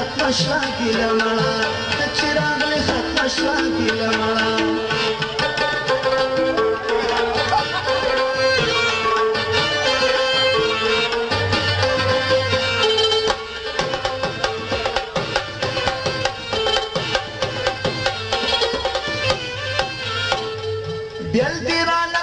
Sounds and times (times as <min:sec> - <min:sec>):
Middle Eastern music: 0:00.0 - 0:22.2
Tabla: 0:00.0 - 0:22.2.